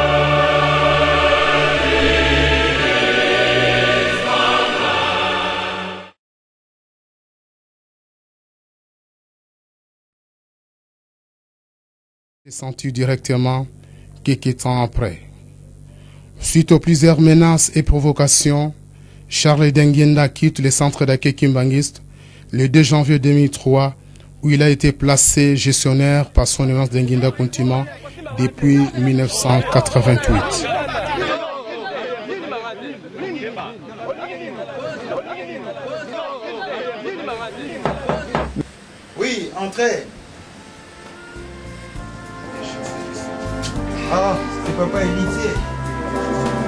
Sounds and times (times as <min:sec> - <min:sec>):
Speech: 0:12.5 - 0:15.3, 0:16.4 - 0:38.4, 0:39.2 - 0:40.1, 0:44.0 - 0:45.6.